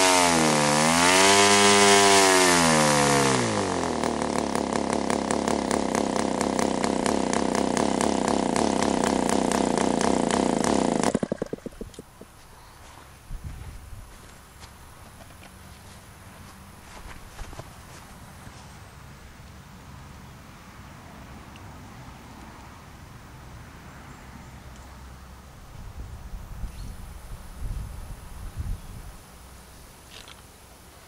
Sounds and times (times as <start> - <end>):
Engine: 0.0 - 13.1, 14.5 - 28.6, 29.2 - 31.0.